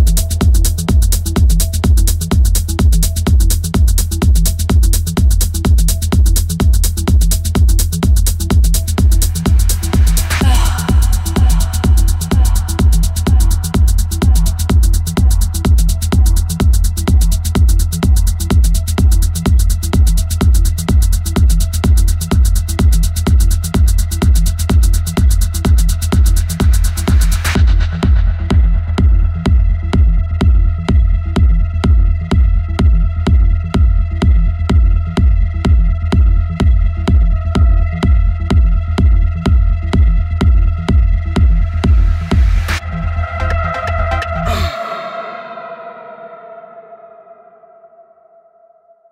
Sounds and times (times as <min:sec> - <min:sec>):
Techno: 0:00.0 - 0:47.2.